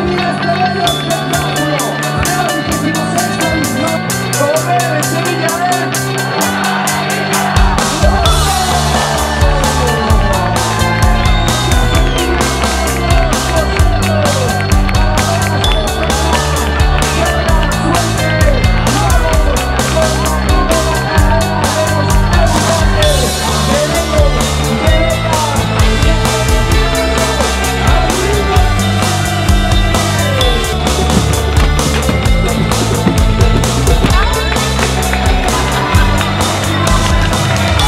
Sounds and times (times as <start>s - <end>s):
Music: 0.0s - 37.8s.